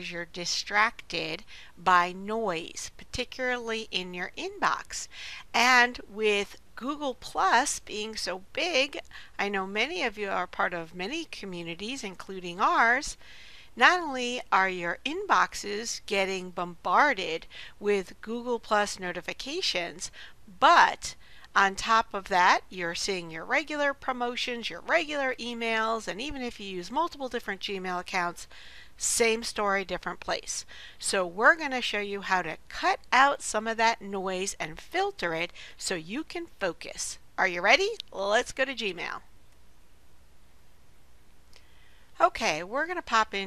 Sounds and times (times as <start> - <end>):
Speech: 0.0 - 13.2, 13.8 - 39.2, 42.2 - 43.4.